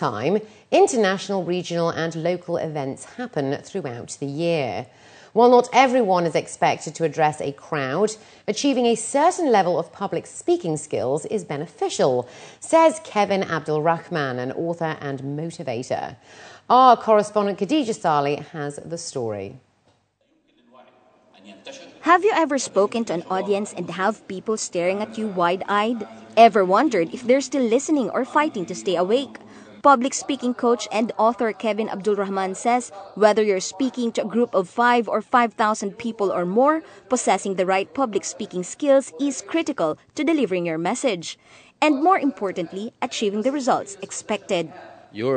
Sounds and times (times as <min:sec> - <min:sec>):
Female speech, woman speaking: 0:00.0 - 0:19.6, 0:22.0 - 0:44.9.